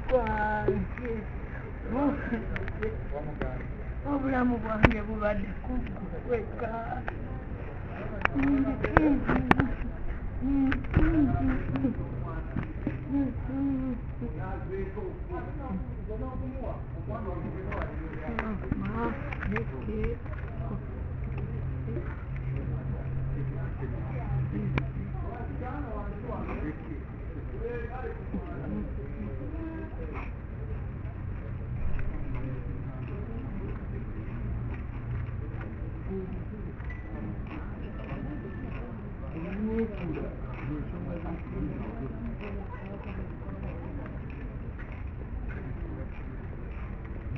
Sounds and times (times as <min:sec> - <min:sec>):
Speech: 0:00.0 - 0:47.3.